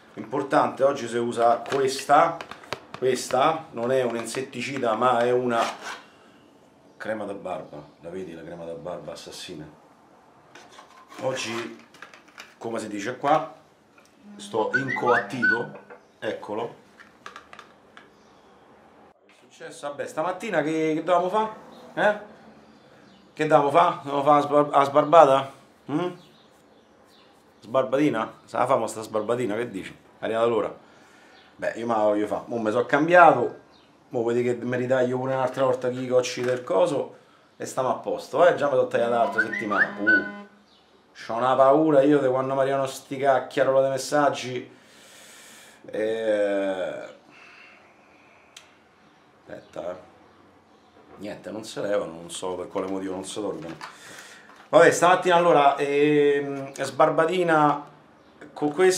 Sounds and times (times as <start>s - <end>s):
Speech: 0.2s - 2.4s, 3.0s - 5.8s, 7.0s - 9.8s, 11.2s - 11.8s, 12.6s - 13.6s, 14.2s - 16.8s, 19.4s - 22.3s, 23.4s - 26.3s, 27.6s - 30.8s, 31.6s - 40.3s, 41.2s - 44.7s, 45.9s - 47.2s, 49.5s - 50.1s, 51.2s - 53.8s, 54.7s - 58.9s.